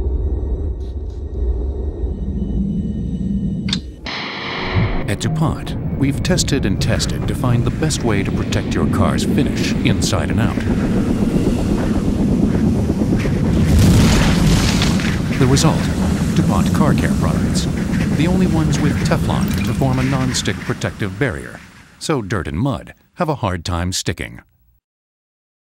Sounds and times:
Speech: 0:05.0 - 0:10.7, 0:15.4 - 0:24.5.

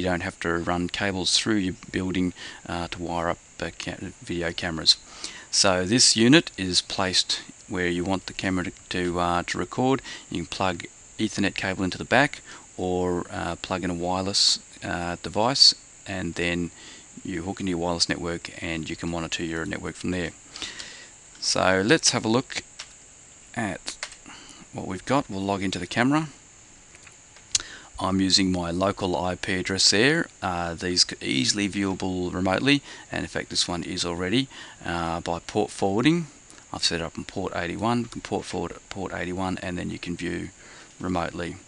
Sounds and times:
Speech: 0:00.0 - 0:20.4, 0:21.4 - 0:22.7, 0:23.6 - 0:24.0, 0:24.7 - 0:26.4, 0:28.0 - 0:41.6.

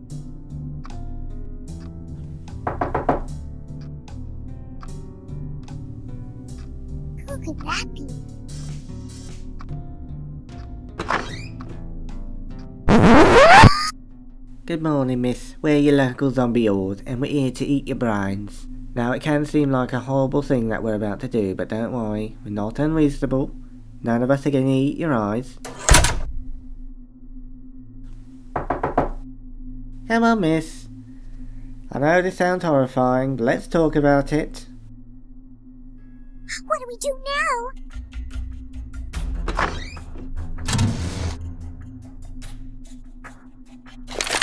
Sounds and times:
Music: 0:00.0 - 0:44.4
Speech: 0:07.2 - 0:08.2, 0:14.7 - 0:25.6, 0:30.1 - 0:30.9, 0:31.9 - 0:34.7, 0:36.5 - 0:37.7.

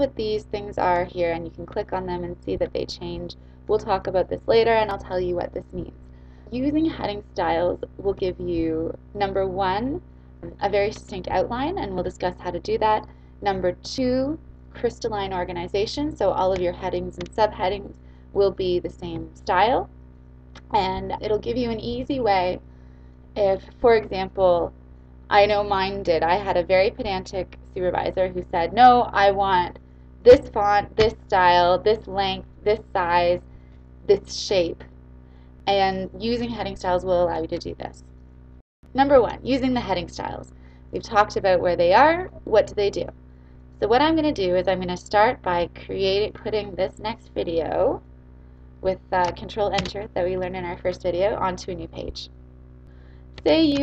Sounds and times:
Speech: 0:00.0 - 0:19.9, 0:20.7 - 0:22.6, 0:23.4 - 0:24.7, 0:25.3 - 0:33.4, 0:34.1 - 0:34.9, 0:35.7 - 0:38.0, 0:39.0 - 0:43.1, 0:43.8 - 0:48.0, 0:48.9 - 0:52.3, 0:53.4 - 0:53.8.

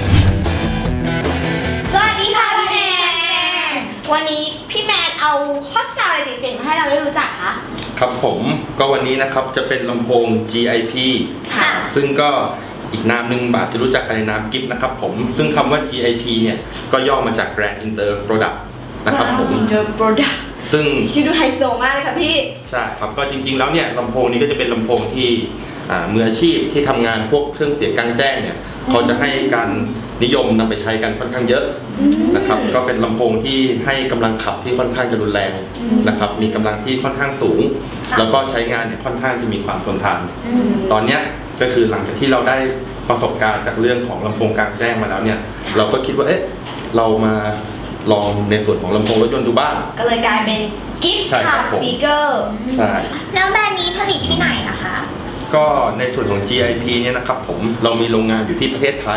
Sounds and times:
Music: 0:00.0 - 0:04.3, 0:15.6 - 0:28.4
Speech: 0:02.0 - 0:20.0, 0:20.8 - 0:59.1.

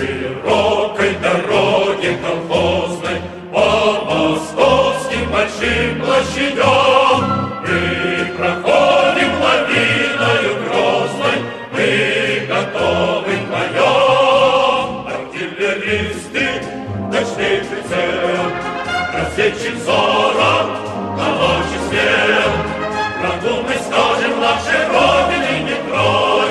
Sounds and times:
Music: 0:00.0 - 0:26.5.

